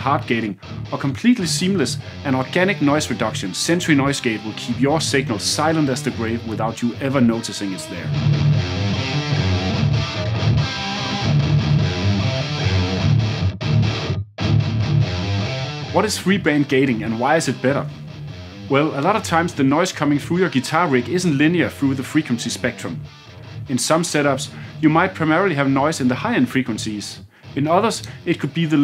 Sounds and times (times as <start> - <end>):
Speech: 0.0 - 8.1, 16.0 - 17.9, 18.7 - 23.0, 23.7 - 28.8
Music: 0.0 - 28.8.